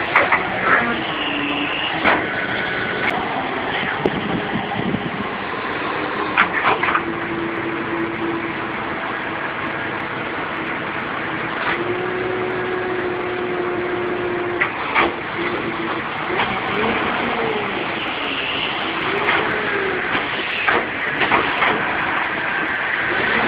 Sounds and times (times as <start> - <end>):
Vehicle: 0.0 - 23.4.